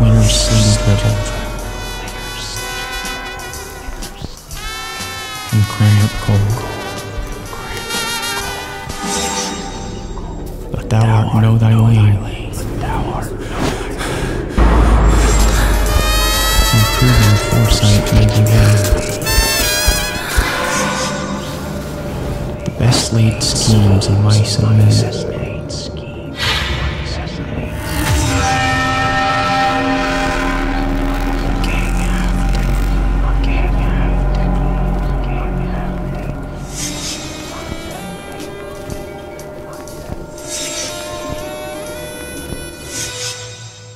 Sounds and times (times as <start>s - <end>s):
Speech: 0.0s - 1.6s, 5.6s - 6.7s, 10.7s - 14.0s, 16.7s - 19.3s, 22.6s - 27.8s, 31.4s - 36.6s
Music: 0.0s - 43.9s.